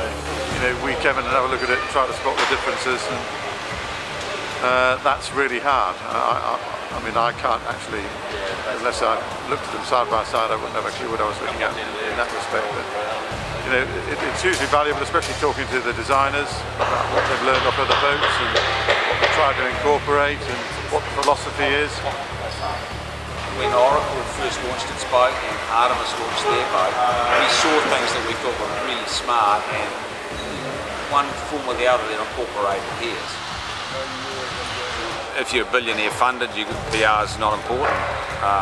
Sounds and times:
Speech: 0.0s - 3.3s, 4.6s - 22.8s, 23.5s - 30.0s, 31.1s - 38.6s
Music: 0.0s - 38.6s.

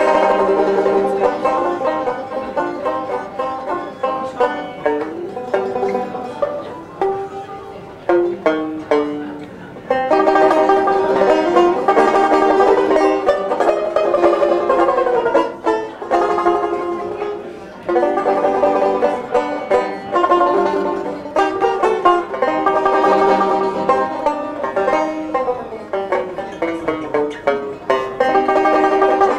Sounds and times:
Pizzicato: 0.0s - 29.3s.

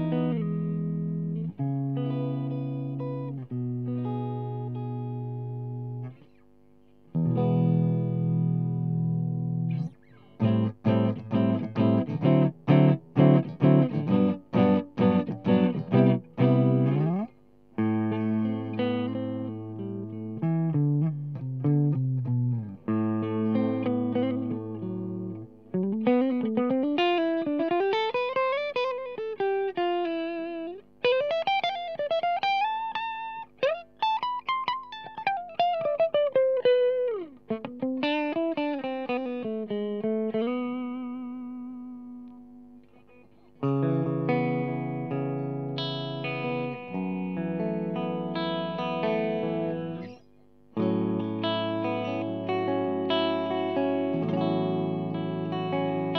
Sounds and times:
Guitar: 0.0s - 56.1s
Inside, small room: 0.0s - 56.1s.

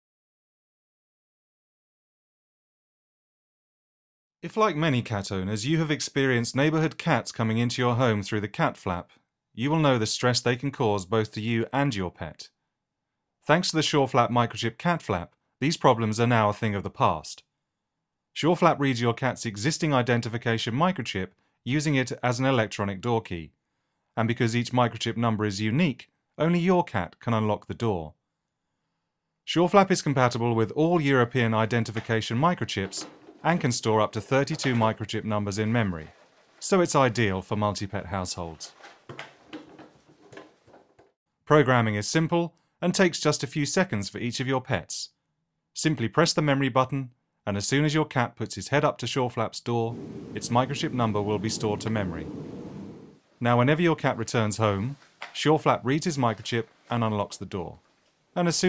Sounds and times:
Speech: 4.4s - 12.6s, 13.4s - 17.5s, 18.4s - 23.6s, 24.2s - 28.2s, 29.5s - 38.8s, 41.5s - 45.2s, 45.8s - 52.3s, 53.4s - 57.8s, 58.4s - 58.6s
Flap: 31.0s - 41.2s, 49.9s - 53.2s.

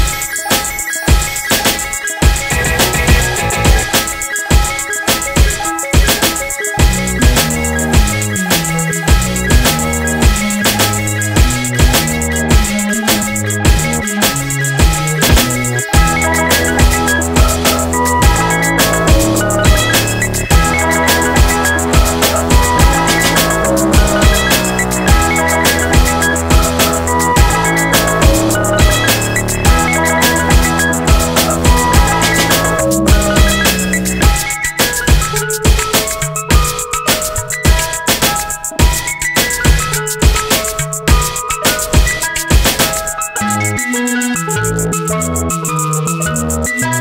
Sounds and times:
Music: 0.0s - 47.0s.

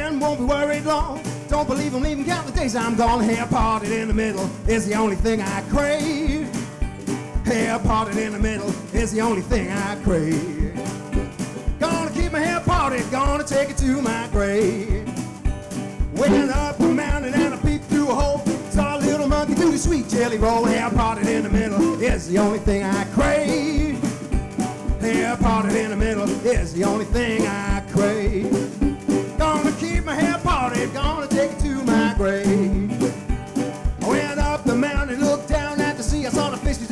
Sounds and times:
Blues: 0.0s - 36.9s.

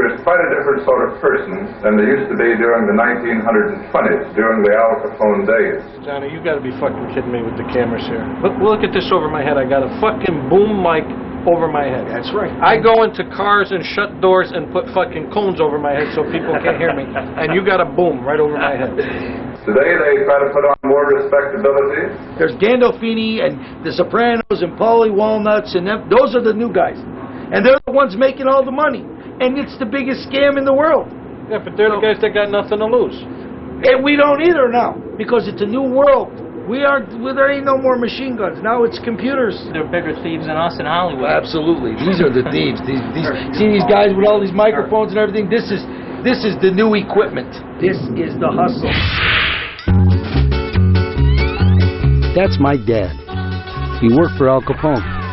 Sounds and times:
Speech: 0.0s - 19.0s, 19.7s - 49.0s, 52.4s - 53.2s, 54.0s - 55.1s.

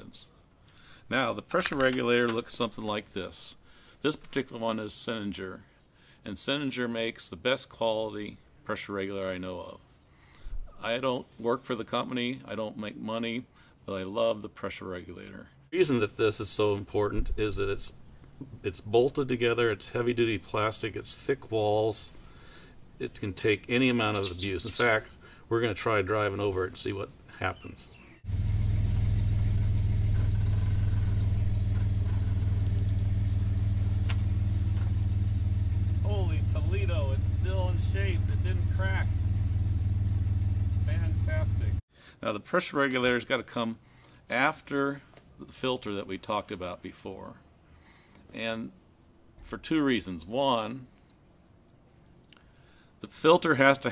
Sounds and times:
Speech: 0.0s - 0.3s, 1.1s - 9.8s, 10.8s - 22.2s, 23.0s - 27.9s, 36.0s - 39.2s, 40.9s - 47.4s, 48.3s - 48.8s, 49.4s - 50.9s, 53.0s - 53.9s.

